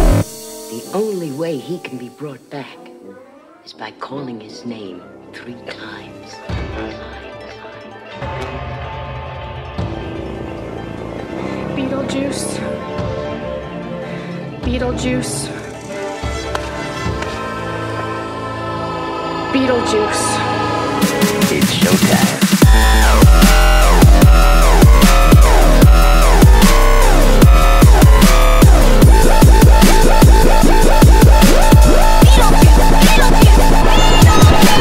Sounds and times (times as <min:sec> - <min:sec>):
Dubstep: 0:00.0 - 0:01.2, 0:19.2 - 0:34.8.